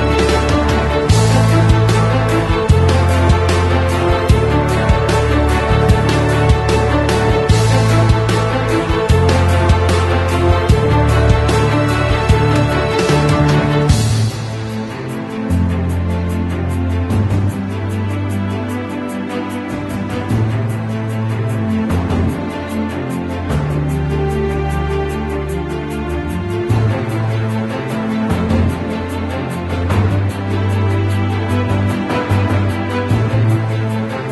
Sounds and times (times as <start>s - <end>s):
Music: 0.0s - 34.3s.